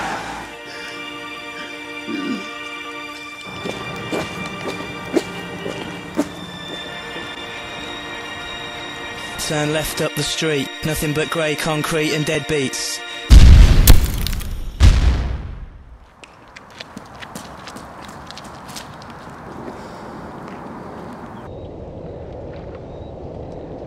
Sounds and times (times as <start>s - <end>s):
Music: 0.0s - 13.3s
Speech: 9.4s - 13.0s
Explosion: 13.3s - 15.9s.